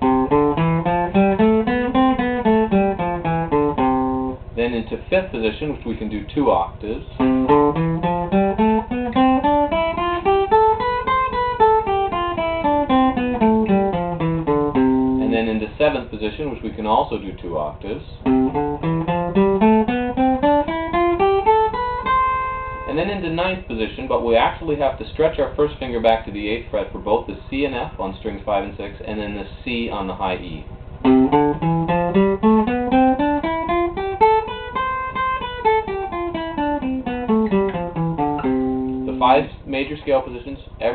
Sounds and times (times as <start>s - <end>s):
Acoustic guitar: 0.0s - 4.7s, 7.2s - 15.6s, 18.2s - 25.4s, 30.3s - 39.8s
Strum: 0.0s - 6.2s, 6.8s - 15.7s, 18.2s - 24.5s, 29.9s - 40.1s
Speech: 4.6s - 7.2s, 15.2s - 18.3s, 22.9s - 30.7s, 39.0s - 40.9s.